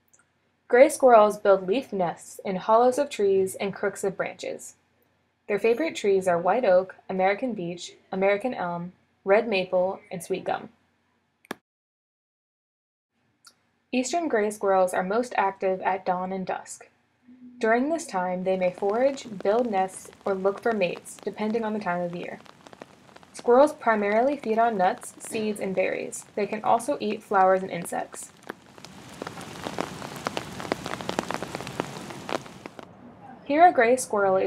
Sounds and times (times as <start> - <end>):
Speech: 0.7 - 4.7, 5.5 - 10.7, 14.0 - 22.4, 23.4 - 28.3, 33.0 - 34.4.